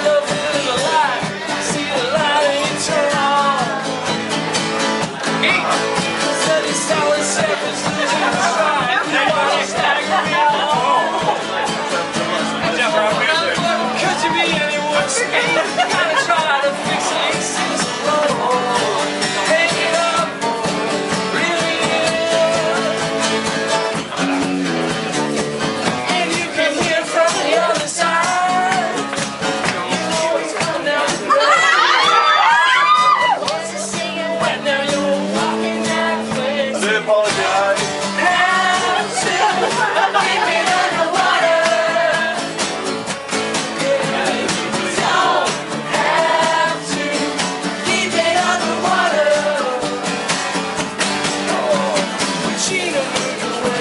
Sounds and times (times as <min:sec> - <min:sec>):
Music: 0:00.0 - 0:53.8
Speech: 0:07.9 - 0:16.5.